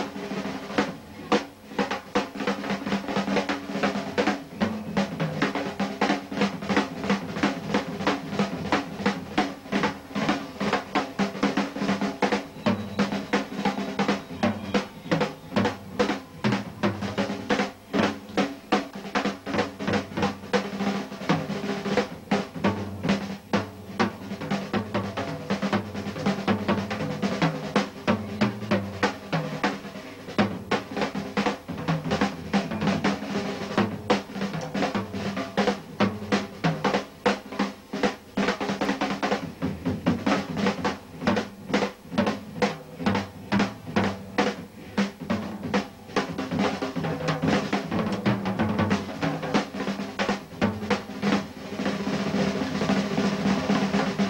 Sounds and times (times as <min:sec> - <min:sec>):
Drum kit: 0:00.0 - 0:54.2
Drum roll: 0:00.0 - 0:54.2.